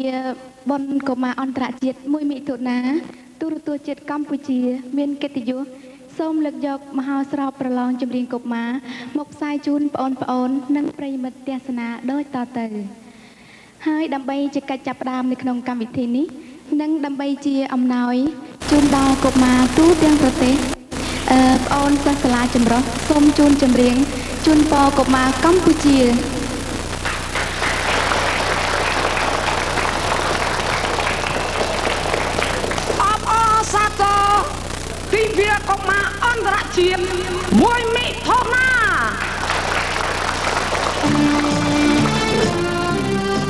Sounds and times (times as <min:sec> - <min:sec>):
Speech: 0:00.0 - 0:13.0, 0:13.8 - 0:26.3, 0:33.0 - 0:39.2.